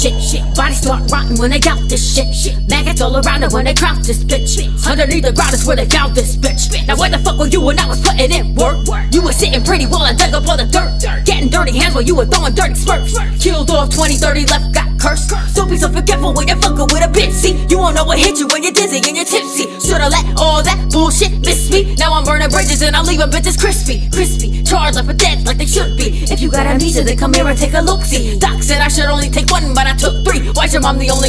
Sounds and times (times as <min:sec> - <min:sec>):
Music: 0:00.0 - 0:31.2.